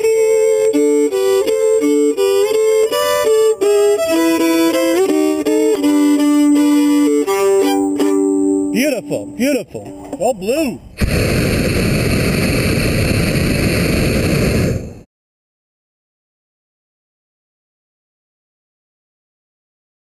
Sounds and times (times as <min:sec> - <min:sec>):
Speech: 0:08.8 - 0:10.8.